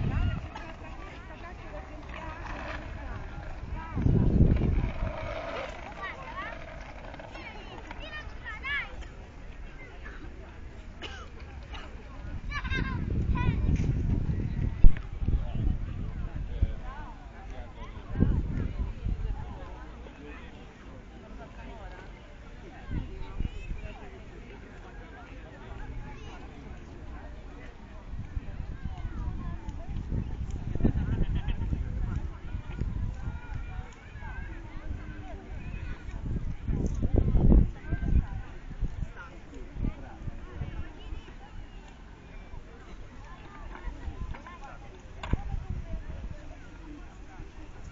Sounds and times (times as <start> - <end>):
Speech: 0.0 - 47.9.